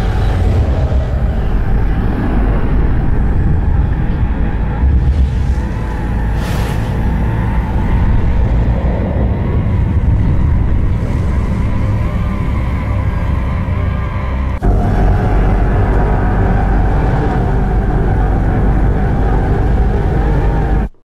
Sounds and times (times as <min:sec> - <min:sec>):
Sound effect: 0:00.0 - 0:21.0.